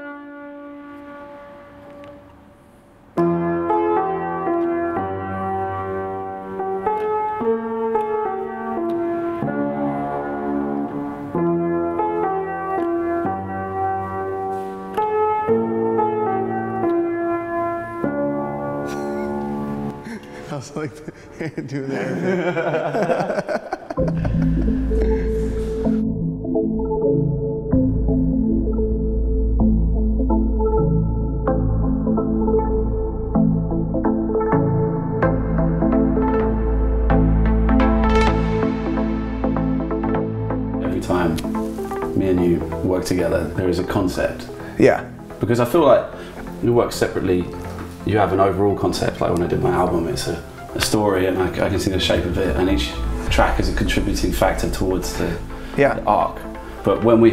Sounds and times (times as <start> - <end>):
Music: 0.0 - 57.3.